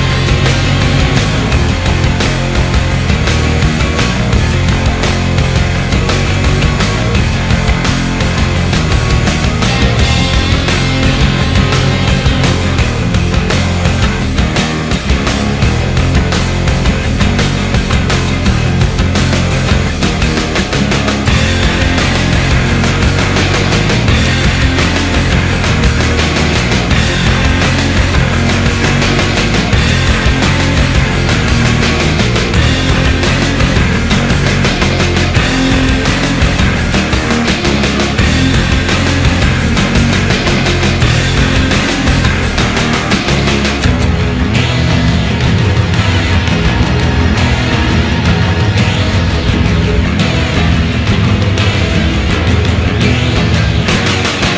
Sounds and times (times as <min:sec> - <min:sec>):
Music: 0:00.0 - 0:54.5.